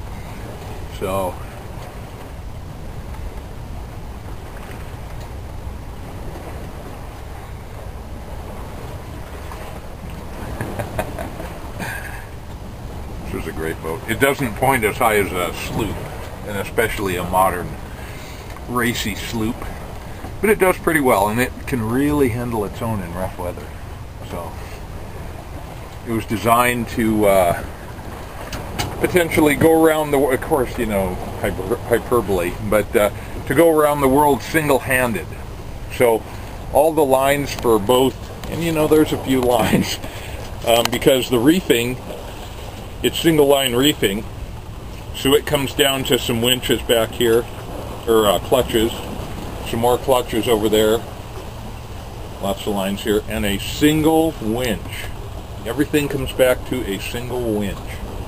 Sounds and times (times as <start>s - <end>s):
Wind: 0.0s - 58.2s.